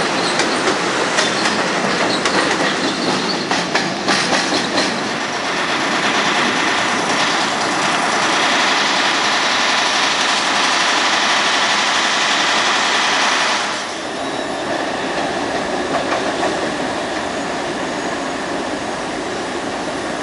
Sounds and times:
Railroad car, train wagon: 0.0 - 20.2
Subway, metro, underground: 0.0 - 20.2
Train: 0.0 - 20.2
Clickety-clack: 0.1 - 13.8, 15.1 - 16.9.

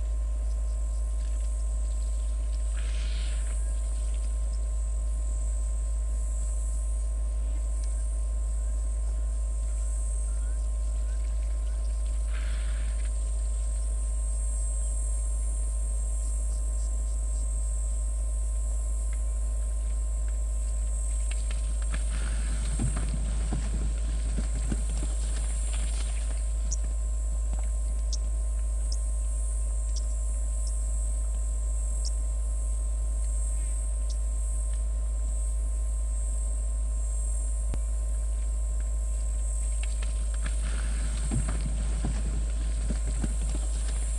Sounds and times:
Animal: 0.4 - 5.0, 7.0 - 14.1, 19.1 - 32.4, 39.2 - 44.1.

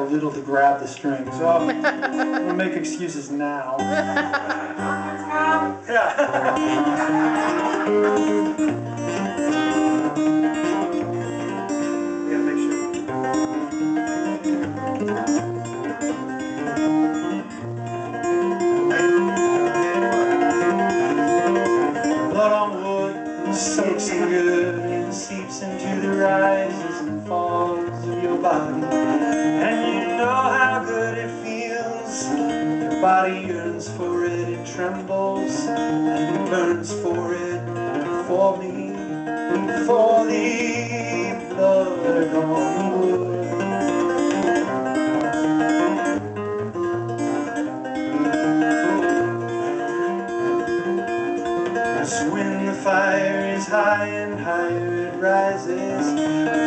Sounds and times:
Speech: 0.0 - 1.7, 2.5 - 3.8, 5.2 - 6.2, 12.3 - 12.8
Music: 0.0 - 56.6.

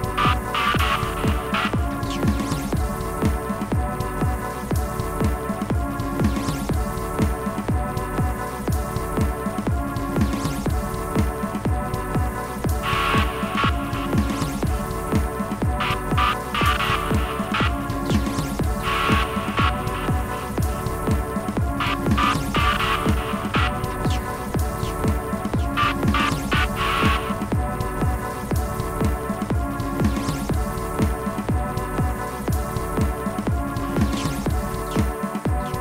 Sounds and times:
Music: 0.0 - 35.8.

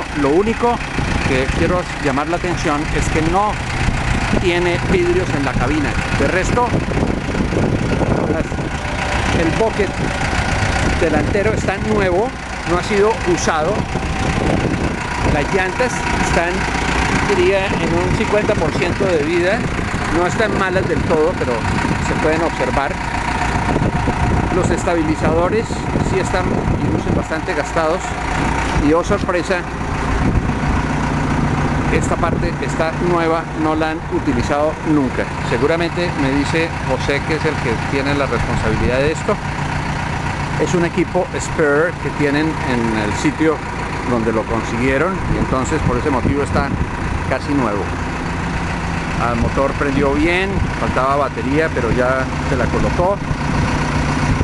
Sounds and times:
Speech: 0.0 - 3.6, 4.3 - 6.8, 9.3 - 10.0, 10.9 - 13.9, 15.2 - 23.0, 24.5 - 28.1, 28.8 - 29.7, 31.9 - 39.4, 40.6 - 47.9, 49.2 - 53.2.

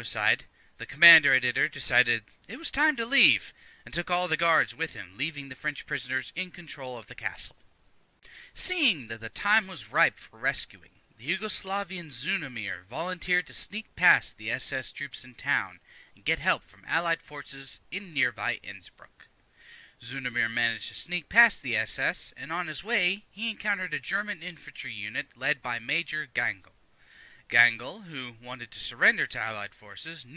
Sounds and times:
Narration, monologue: 0.0 - 30.3.

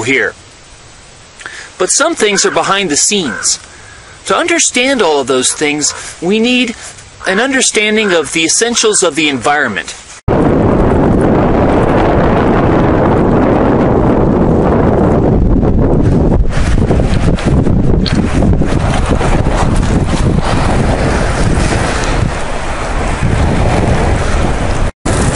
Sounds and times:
Outside, rural or natural: 0.0 - 25.3.

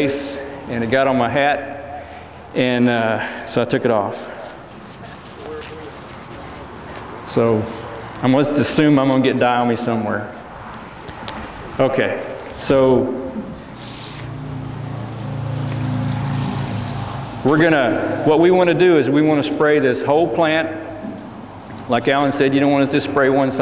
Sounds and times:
Speech: 7.3 - 10.4, 11.8 - 13.2, 17.5 - 20.8, 21.9 - 23.6.

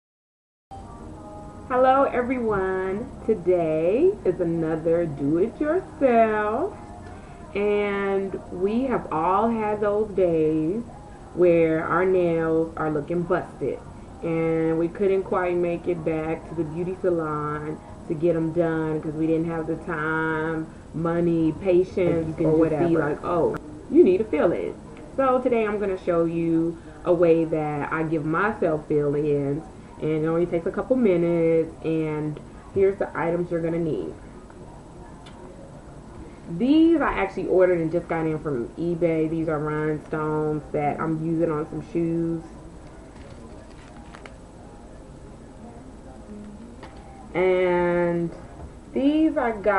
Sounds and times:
Speech: 7.6 - 34.2, 36.5 - 42.6, 47.3 - 49.7.

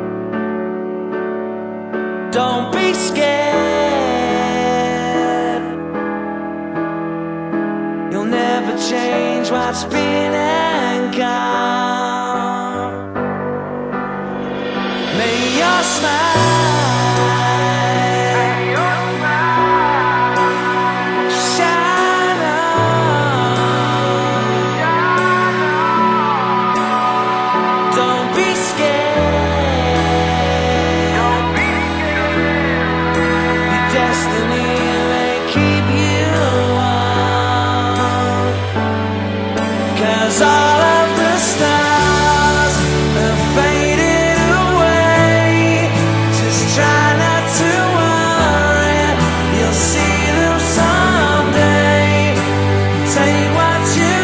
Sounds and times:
Music: 0.0 - 54.2.

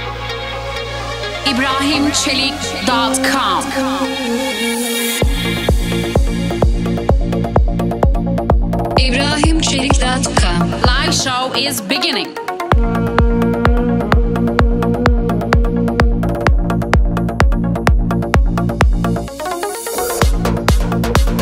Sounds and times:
Music: 0.0 - 21.4
Speech: 1.4 - 4.2, 9.0 - 12.4.

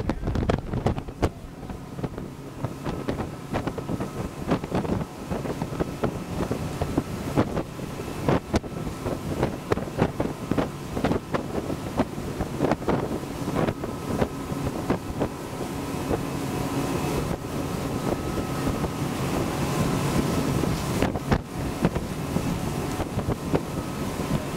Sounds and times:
Motorboat, speedboat: 0.0 - 24.5.

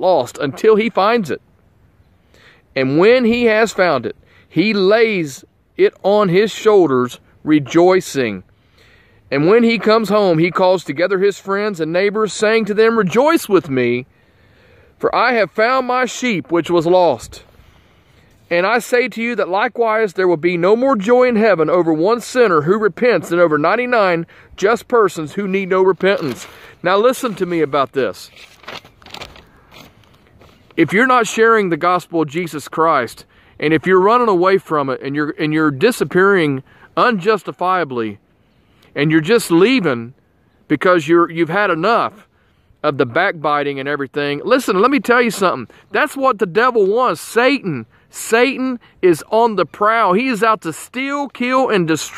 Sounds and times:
Speech: 0.0 - 1.4, 2.7 - 8.5, 9.3 - 14.1, 15.0 - 17.5, 18.5 - 28.4, 30.8 - 38.2, 39.0 - 52.1
Outside, rural or natural: 0.0 - 52.1.

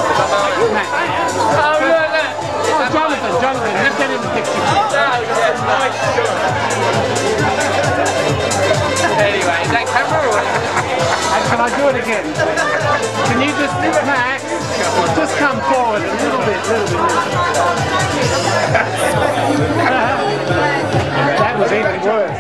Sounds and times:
Crowd: 0.0 - 22.4
Music: 0.0 - 22.4
Speech: 0.0 - 22.4.

